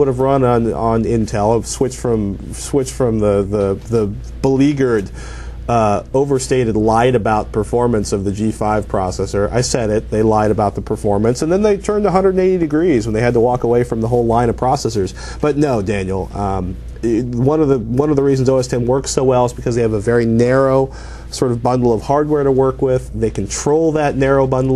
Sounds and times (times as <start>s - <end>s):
Speech: 0.0s - 24.7s.